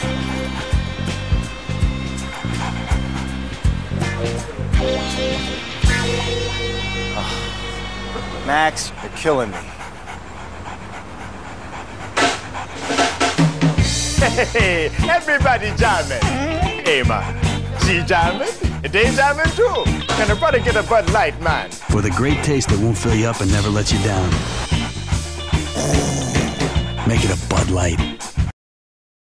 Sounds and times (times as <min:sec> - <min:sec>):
Music: 0:00.0 - 0:09.0, 0:12.9 - 0:28.5
Speech: 0:17.8 - 0:24.4, 0:27.1 - 0:28.1.